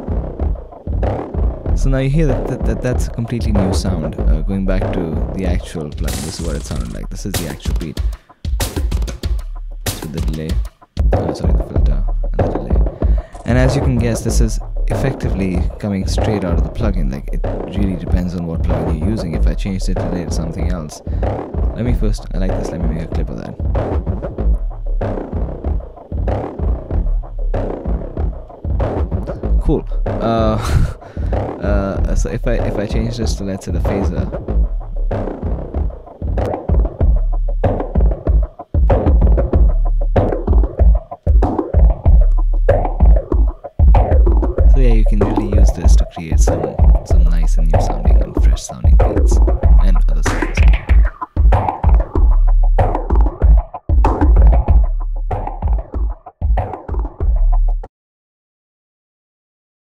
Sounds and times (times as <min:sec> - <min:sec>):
Music: 0:00.0 - 0:57.9
Speech: 0:01.8 - 0:08.0, 0:09.9 - 0:10.6, 0:11.2 - 0:21.1, 0:21.8 - 0:23.6, 0:29.6 - 0:30.9, 0:31.5 - 0:34.4, 0:44.7 - 0:50.8.